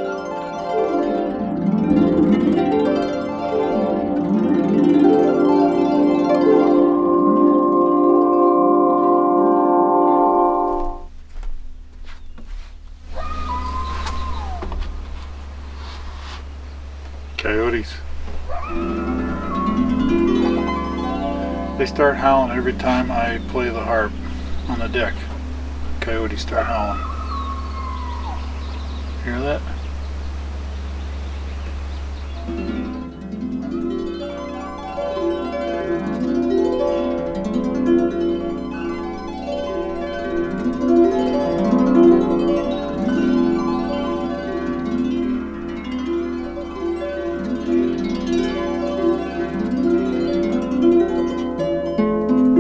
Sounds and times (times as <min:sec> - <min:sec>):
Harp: 0:00.0 - 0:11.1, 0:13.0 - 0:16.6, 0:17.3 - 0:52.6.